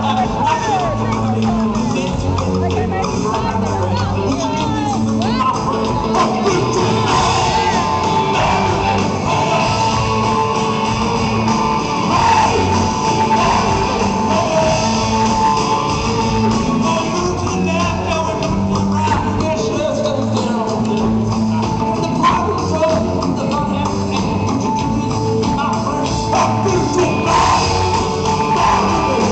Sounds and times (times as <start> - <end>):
Music: 0.0 - 29.3.